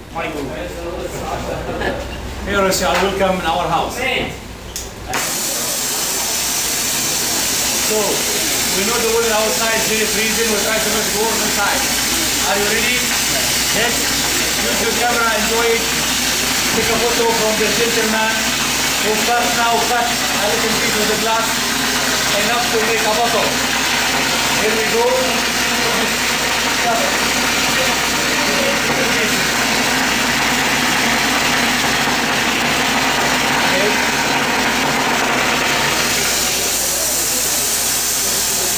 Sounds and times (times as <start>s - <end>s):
Speech: 0.1s - 4.4s, 7.7s - 16.0s, 16.7s - 21.6s, 22.2s - 23.6s, 24.5s - 26.2s, 26.8s - 29.5s, 33.5s - 34.2s.